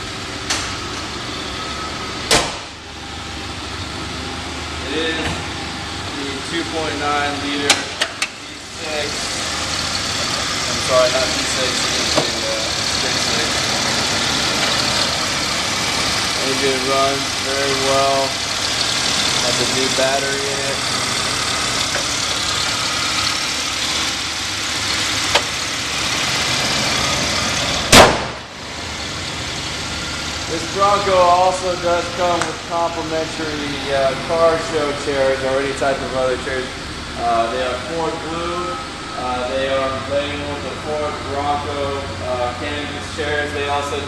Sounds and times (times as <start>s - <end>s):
Car: 0.0s - 44.0s
Idling: 0.0s - 44.0s
Speech: 4.8s - 5.4s, 6.1s - 9.3s, 10.7s - 13.6s, 16.4s - 18.4s, 19.4s - 20.8s, 30.5s - 44.0s.